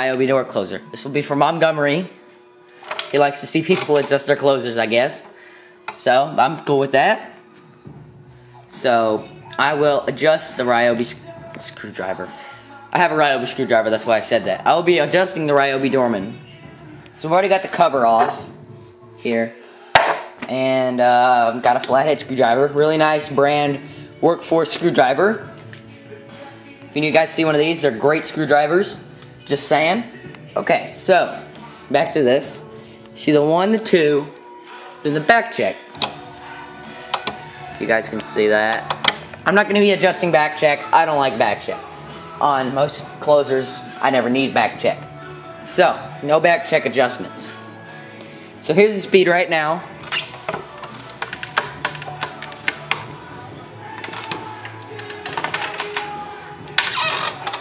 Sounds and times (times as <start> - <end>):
Speech: 0.0 - 2.2, 3.1 - 5.3, 5.9 - 7.4, 8.7 - 16.4, 17.2 - 18.5, 19.2 - 19.6, 20.4 - 25.4, 27.0 - 34.3, 35.0 - 35.8, 37.8 - 41.8, 42.4 - 45.0, 45.7 - 47.6, 48.6 - 49.9.